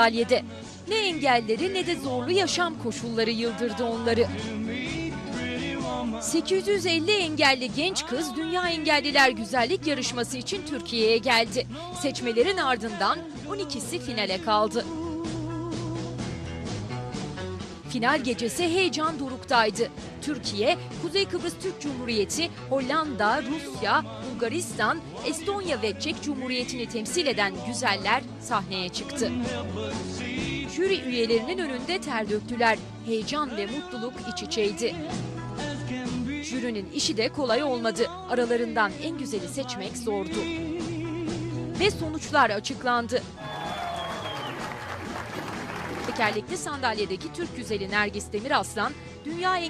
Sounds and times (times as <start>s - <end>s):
Speech: 0.0s - 4.3s, 6.2s - 14.9s, 17.9s - 29.5s, 30.8s - 35.1s, 36.4s - 40.5s, 41.8s - 43.3s, 46.1s - 49.7s
Music: 0.0s - 49.7s.